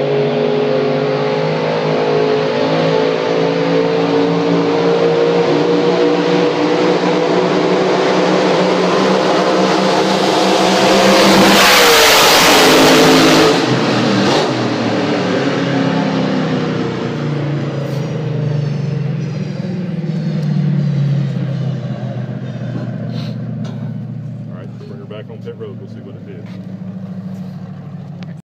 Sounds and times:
Vehicle: 0.0 - 28.4
Speech: 24.5 - 26.6.

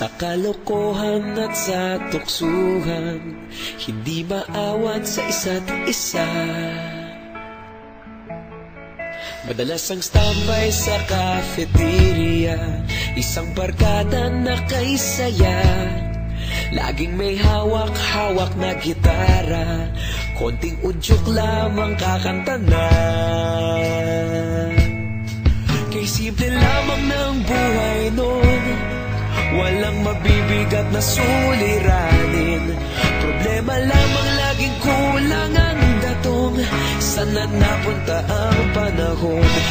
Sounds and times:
Music: 0.0 - 39.7.

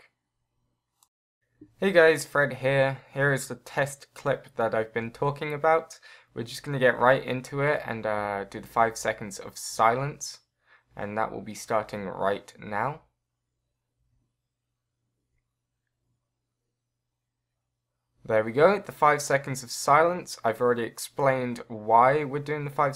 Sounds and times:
Speech: 1.8 - 10.4, 11.0 - 13.1, 18.3 - 22.9.

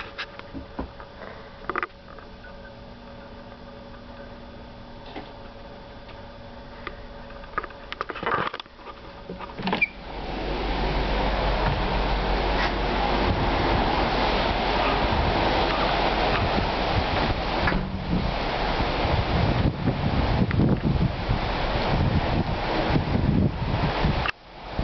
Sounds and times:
Wind noise (microphone): 10.2 - 24.8.

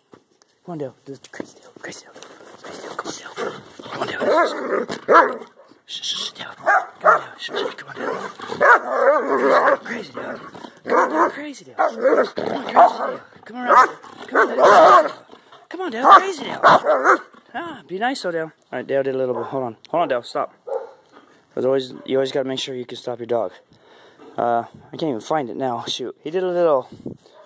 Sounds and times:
Speech: 0.6 - 2.2, 3.0 - 4.7, 9.4 - 16.8, 17.5 - 20.6, 21.6 - 23.6, 24.4 - 26.9
Bow-wow: 4.2 - 5.8, 6.6 - 9.8, 10.8 - 15.2, 16.1 - 17.3, 20.7 - 21.1
Yip: 8.6 - 9.7, 20.7 - 21.0.

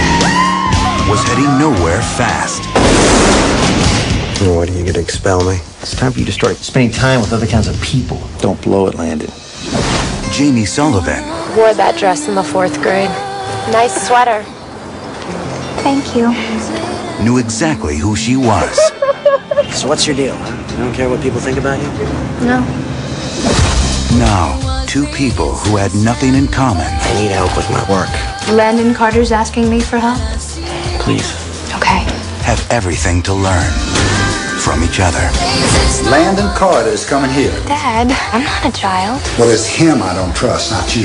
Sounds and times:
Music: 0.0 - 41.0.

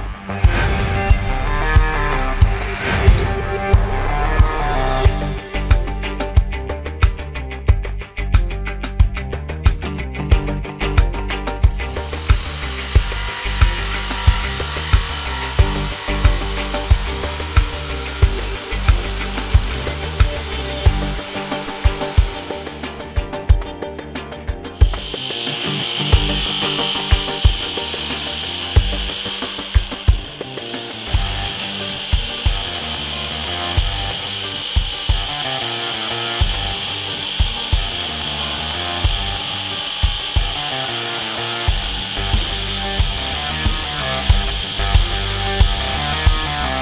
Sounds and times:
Power tool: 0.0 - 3.3, 3.9 - 6.5, 11.5 - 46.8.

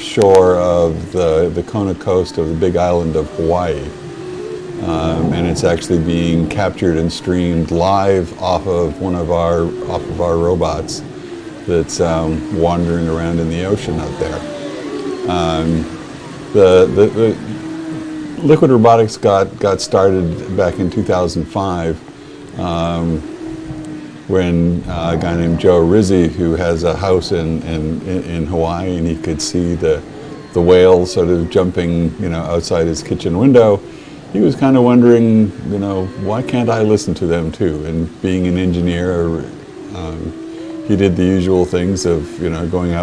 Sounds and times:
Speech: 0.0 - 4.0, 4.8 - 11.0, 11.7 - 14.4, 15.3 - 15.9, 16.6 - 17.4, 18.4 - 22.0, 22.6 - 23.2, 24.3 - 30.0, 30.6 - 33.8, 34.4 - 43.0.

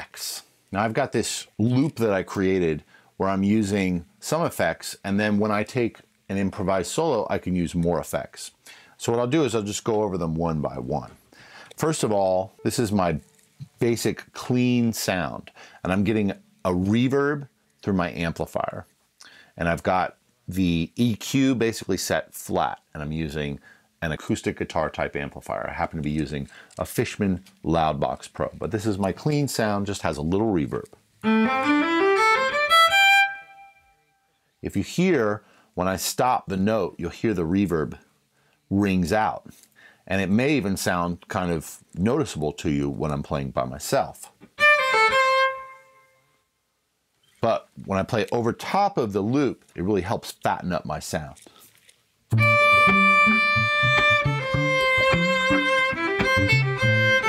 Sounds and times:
Speech: 0.0 - 18.9, 19.6 - 31.0, 34.6 - 38.1, 38.7 - 44.4, 47.4 - 51.4.

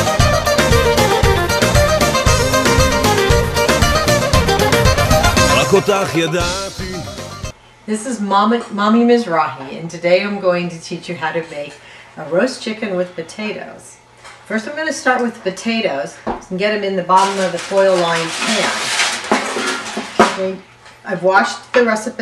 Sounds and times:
Speech: 5.5 - 7.0, 7.9 - 18.8, 20.3 - 22.2.

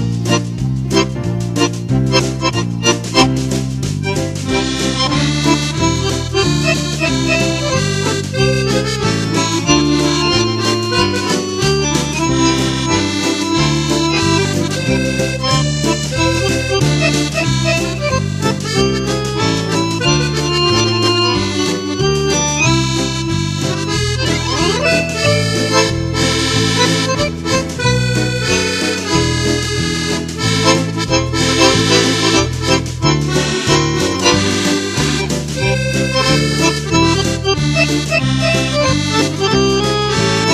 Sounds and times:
Music: 0.0 - 40.5.

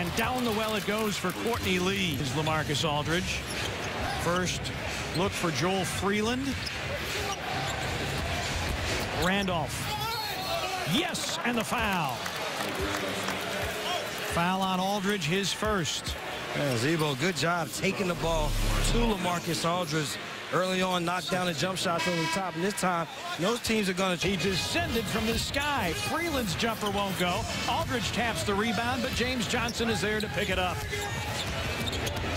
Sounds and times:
Speech: 0.0 - 3.4, 4.2 - 6.6, 10.9 - 12.2, 14.3 - 31.3.

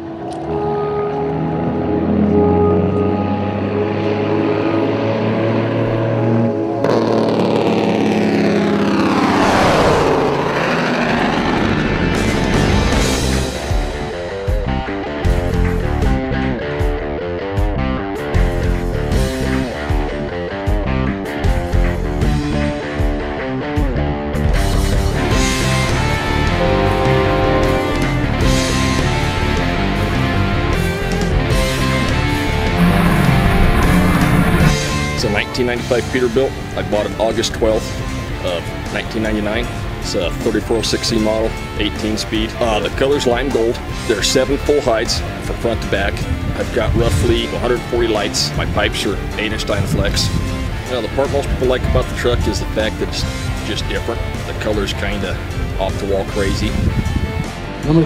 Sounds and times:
Music: 0.0 - 7.3, 10.6 - 58.0
Truck: 0.0 - 16.5, 24.5 - 41.9
Speech: 35.2 - 50.3, 50.9 - 56.8.

